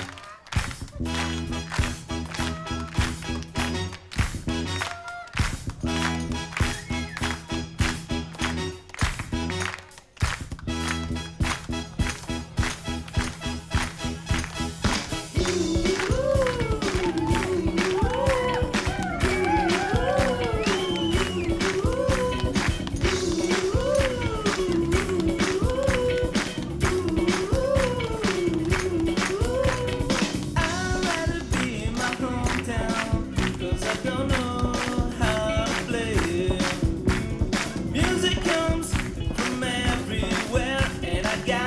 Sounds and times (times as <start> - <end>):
Music: 0.0 - 41.6.